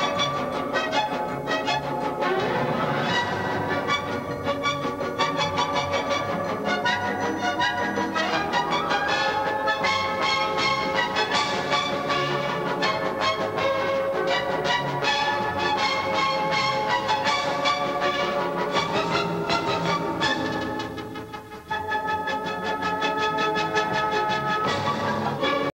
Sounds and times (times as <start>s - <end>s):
Classical music: 0.0s - 25.7s.